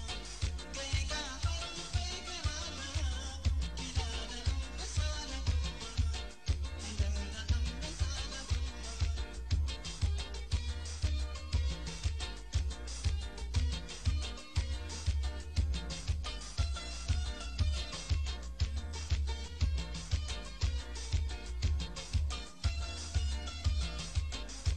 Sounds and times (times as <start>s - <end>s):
Music: 0.0s - 24.7s.